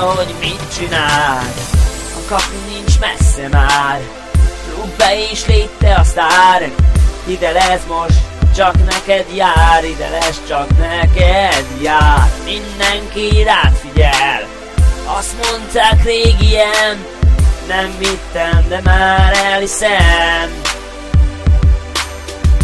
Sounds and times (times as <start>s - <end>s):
Music: 0.0s - 22.6s.